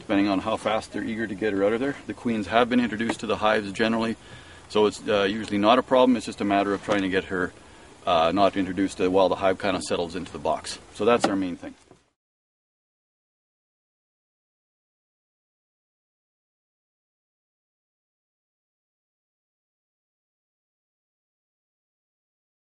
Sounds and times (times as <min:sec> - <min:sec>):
Speech: 0:00.0 - 0:11.8.